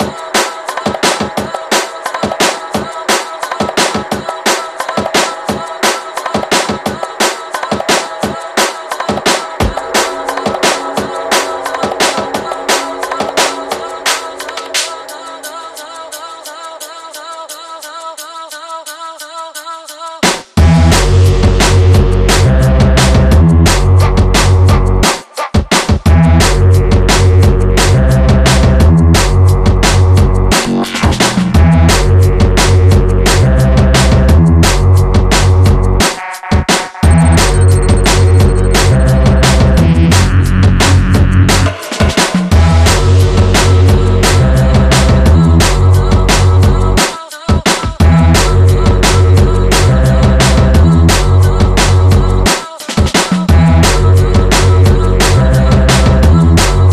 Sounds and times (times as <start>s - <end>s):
Drum and bass: 0.0s - 16.9s, 20.4s - 56.9s.